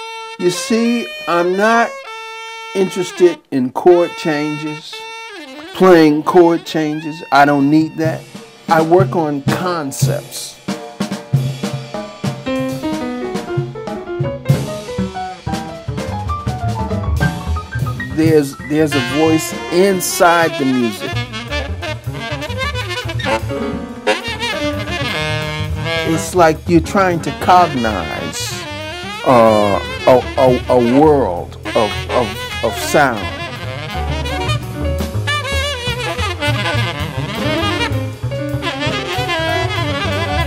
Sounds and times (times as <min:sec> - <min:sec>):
Music: 0:00.0 - 0:40.4
Speech: 0:00.4 - 0:02.0, 0:02.8 - 0:05.0, 0:05.8 - 0:10.6, 0:18.2 - 0:21.1, 0:26.0 - 0:28.6, 0:29.3 - 0:33.4.